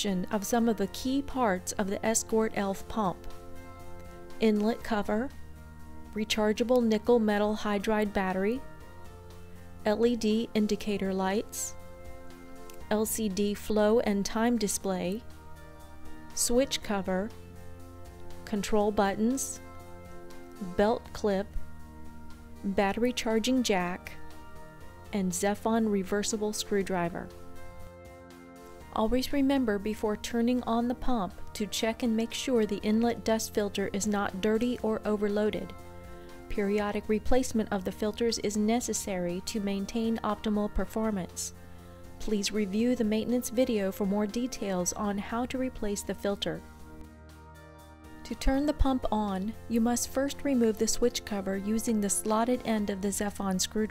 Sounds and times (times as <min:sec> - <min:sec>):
Speech: 0:00.0 - 0:03.2, 0:04.4 - 0:05.3, 0:06.2 - 0:08.6, 0:09.9 - 0:11.8, 0:12.9 - 0:15.2, 0:16.4 - 0:17.3, 0:18.5 - 0:19.6, 0:20.6 - 0:21.5, 0:22.6 - 0:24.1, 0:25.2 - 0:27.3, 0:29.0 - 0:35.7, 0:36.5 - 0:41.5, 0:42.2 - 0:46.6, 0:48.3 - 0:53.9
Music: 0:00.0 - 0:53.9.